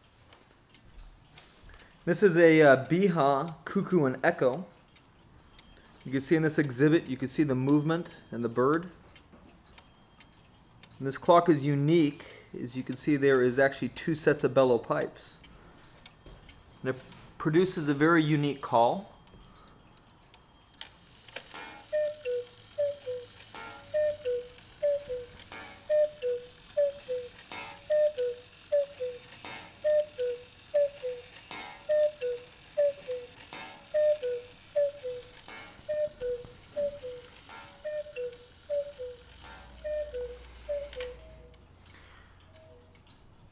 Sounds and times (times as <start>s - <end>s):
Speech: 2.1s - 4.7s, 6.1s - 9.0s, 11.0s - 15.4s, 16.8s - 19.1s.